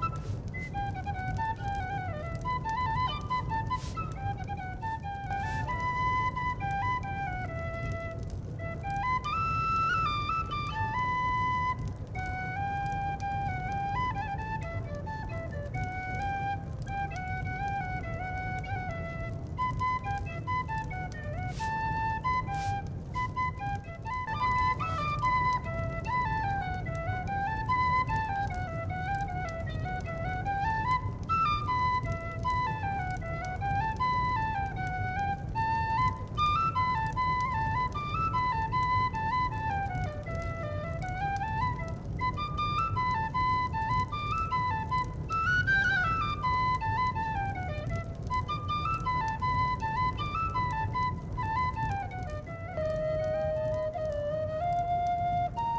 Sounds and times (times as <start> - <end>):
Flute: 0.0 - 55.7
Folk music: 0.0 - 55.7.